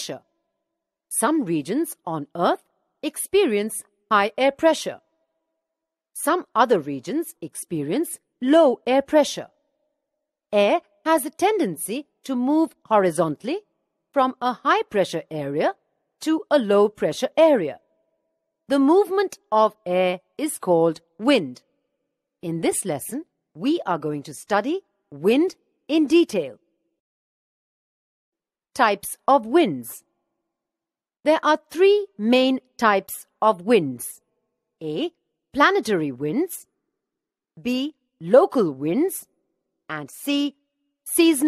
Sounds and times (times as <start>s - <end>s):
Speech: 0.0s - 0.2s, 1.1s - 5.0s, 6.2s - 9.5s, 10.6s - 17.8s, 18.7s - 21.6s, 22.4s - 26.6s, 28.8s - 30.0s, 31.3s - 34.2s, 34.8s - 36.7s, 37.6s - 39.3s, 39.9s - 41.4s.